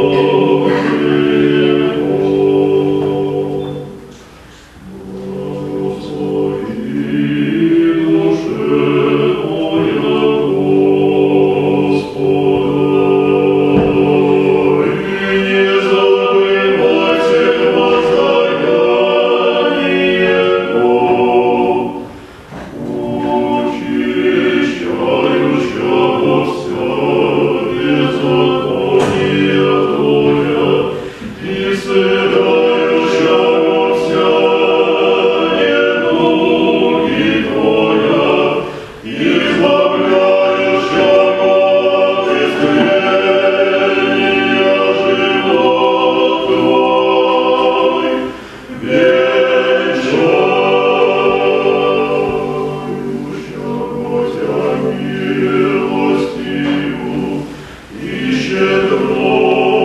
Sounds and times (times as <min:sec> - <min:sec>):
Choir: 0:00.0 - 0:59.8
Gospel music: 0:00.0 - 0:59.8.